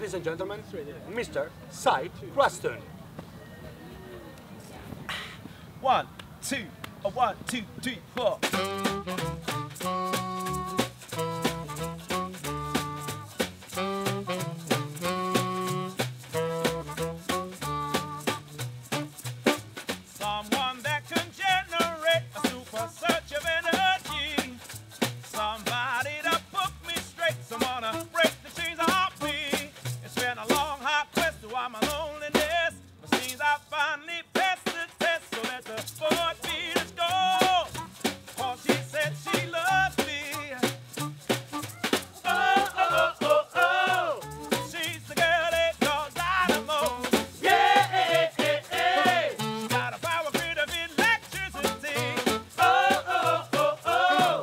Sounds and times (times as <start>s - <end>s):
Music: 8.4s - 54.4s.